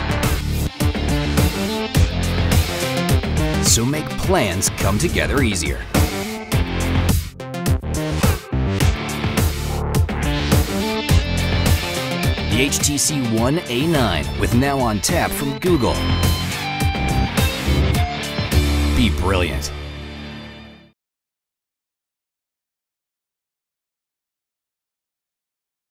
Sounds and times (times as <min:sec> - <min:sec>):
Music: 0:00.0 - 0:21.0
Speech: 0:03.6 - 0:06.0, 0:12.5 - 0:16.1, 0:19.0 - 0:19.8.